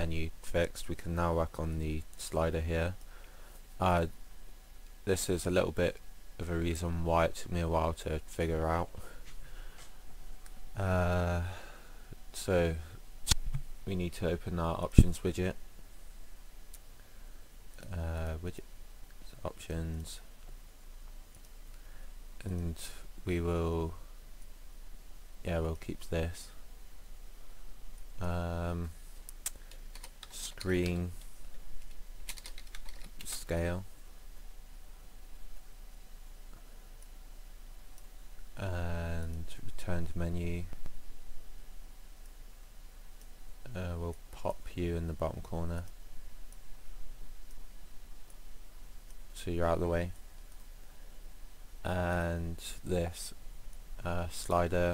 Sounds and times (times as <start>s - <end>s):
Speech: 0.0s - 3.0s, 3.8s - 4.2s, 5.0s - 9.2s, 10.8s - 11.6s, 12.3s - 13.0s, 13.9s - 15.6s, 17.8s - 20.3s, 22.4s - 24.1s, 25.4s - 26.6s, 28.2s - 29.0s, 30.3s - 31.2s, 33.2s - 33.9s, 38.6s - 40.8s, 43.7s - 45.9s, 49.4s - 50.2s, 51.8s - 53.4s, 54.0s - 54.9s.